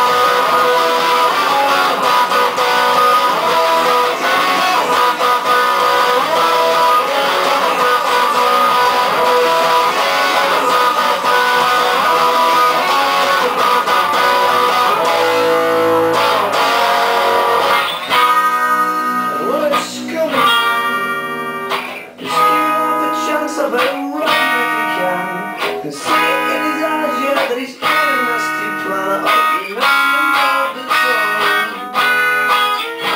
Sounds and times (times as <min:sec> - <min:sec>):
Singing: 0:00.0 - 0:14.0, 0:22.2 - 0:32.0
Guitar: 0:00.0 - 0:33.1
Inside, small room: 0:00.0 - 0:33.1.